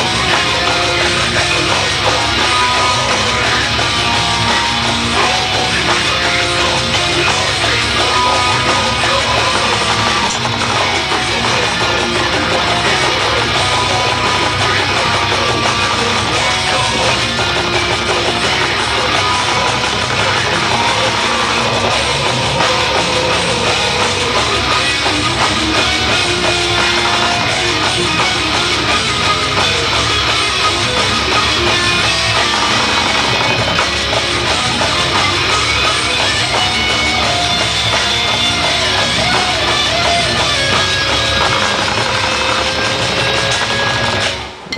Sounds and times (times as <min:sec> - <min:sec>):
Music: 0:00.0 - 0:44.7.